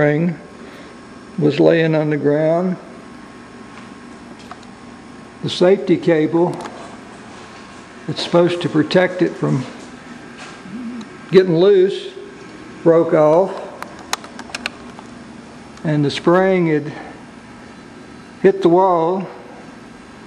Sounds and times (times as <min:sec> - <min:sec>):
Speech: 0:00.0 - 0:00.4, 0:01.4 - 0:02.9, 0:05.4 - 0:06.7, 0:08.1 - 0:09.8, 0:10.7 - 0:12.2, 0:12.8 - 0:13.8, 0:15.8 - 0:17.1, 0:18.4 - 0:19.4.